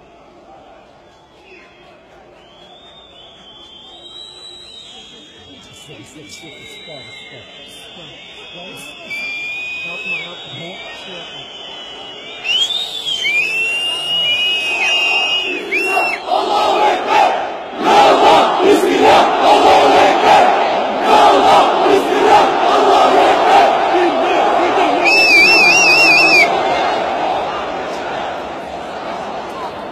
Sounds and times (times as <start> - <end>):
Crowd: 0.0 - 29.9.